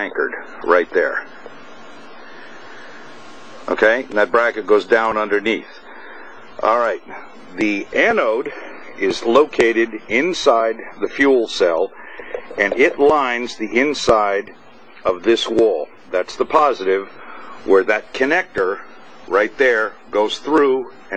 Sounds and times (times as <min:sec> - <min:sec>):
Speech: 0:00.0 - 0:01.3, 0:03.7 - 0:05.8, 0:06.6 - 0:21.1.